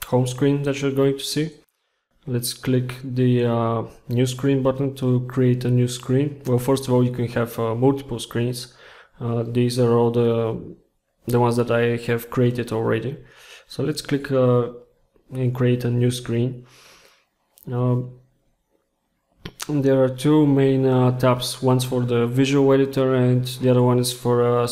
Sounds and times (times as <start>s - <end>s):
Speech: 0.0s - 16.7s, 17.6s - 18.2s, 19.5s - 24.7s.